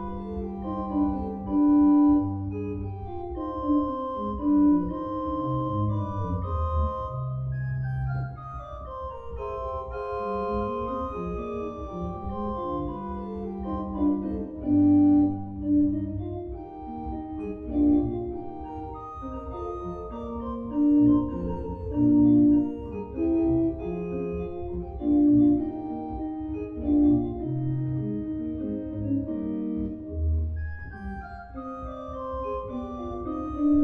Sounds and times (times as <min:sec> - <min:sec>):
Organ: 0:00.0 - 0:33.8
Piano: 0:00.0 - 0:33.8.